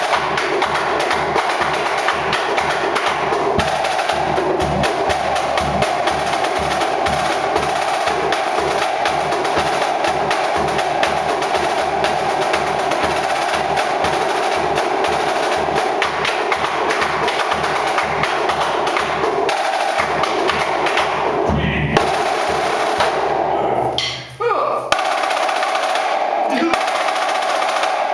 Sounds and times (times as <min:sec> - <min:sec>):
Snare drum: 0:00.0 - 0:28.1
Speech: 0:21.5 - 0:22.0, 0:23.5 - 0:24.9, 0:26.5 - 0:26.8.